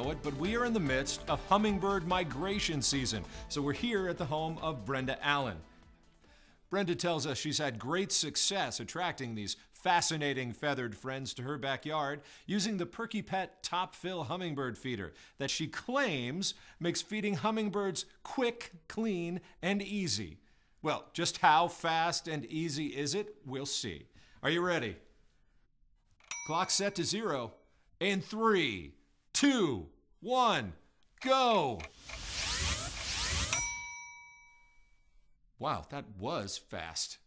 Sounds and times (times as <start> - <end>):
Speech: 0.0 - 5.6, 6.7 - 25.0, 26.5 - 31.8, 35.6 - 37.2.